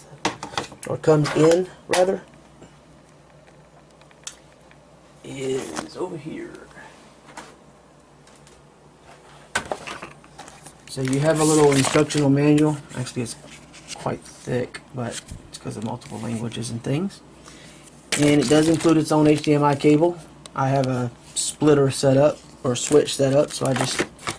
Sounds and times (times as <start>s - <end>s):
Speech: 0.9s - 2.3s, 5.2s - 6.9s, 10.9s - 13.4s, 14.0s - 17.2s, 18.2s - 24.0s.